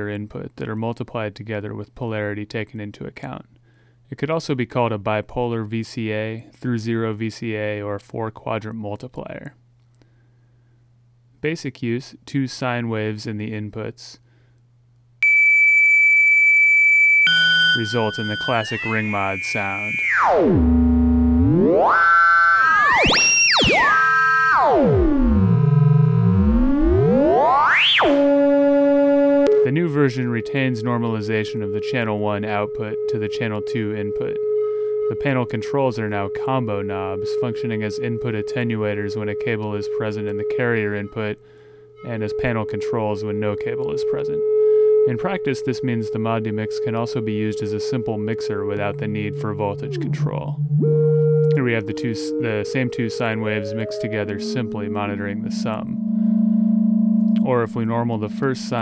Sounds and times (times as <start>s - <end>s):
Speech: 0.0s - 3.5s, 4.1s - 9.6s, 11.4s - 14.2s, 17.8s - 20.0s, 29.6s - 34.4s, 35.1s - 41.4s, 42.0s - 44.4s, 45.1s - 50.6s, 51.5s - 56.0s, 57.4s - 58.8s.